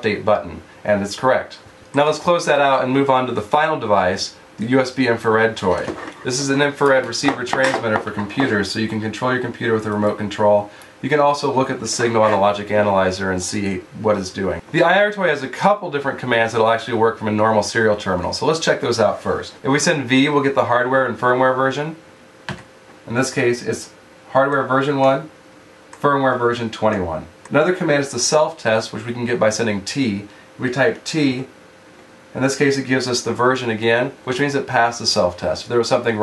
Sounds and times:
Speech: 0.0 - 22.0, 23.1 - 25.4, 26.0 - 31.5, 32.3 - 36.2
Inside, small room: 0.0 - 36.2.

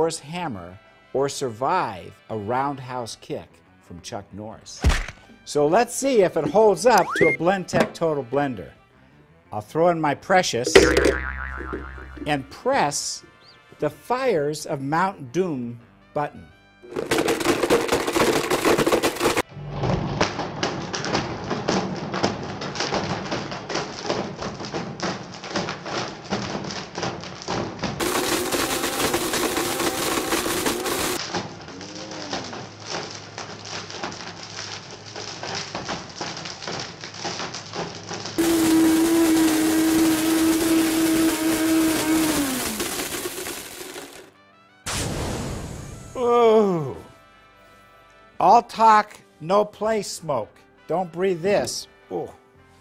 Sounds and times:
Speech: 0.0 - 4.8, 5.5 - 8.8, 9.6 - 10.7, 12.3 - 13.2, 13.8 - 16.5, 46.2 - 47.1, 48.4 - 52.4
Music: 0.0 - 36.0, 44.3 - 52.8.

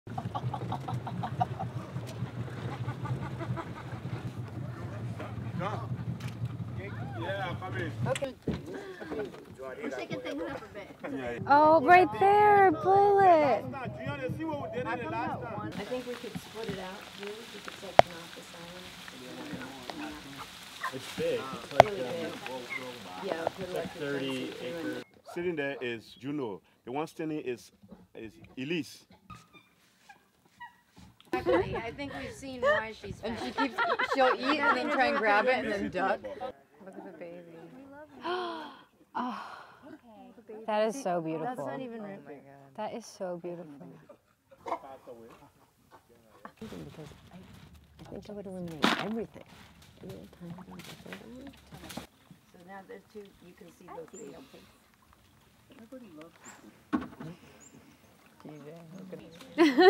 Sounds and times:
Rowboat, canoe, kayak: 0.1 - 14.4, 15.5 - 25.2, 48.8 - 55.7.

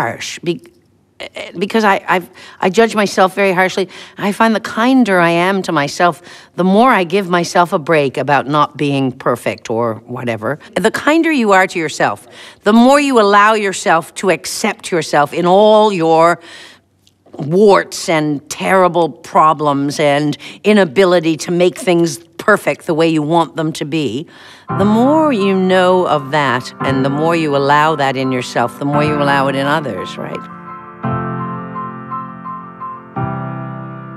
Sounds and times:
Speech: 0.0 - 16.4, 17.3 - 24.2, 24.8 - 30.4.

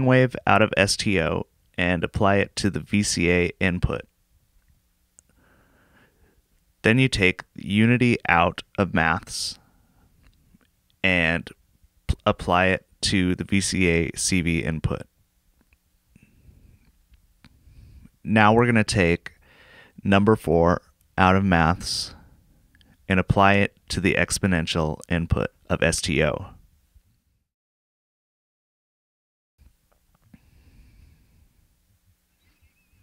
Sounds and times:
Speech: 0.0 - 4.1, 6.8 - 9.6, 11.0 - 15.1, 18.2 - 19.4, 20.0 - 22.2, 23.1 - 26.6.

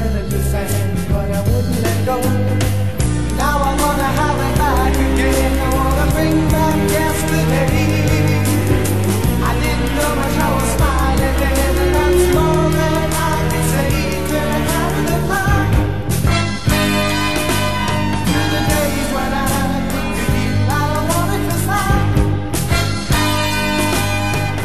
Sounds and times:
Music: 0.0 - 24.6.

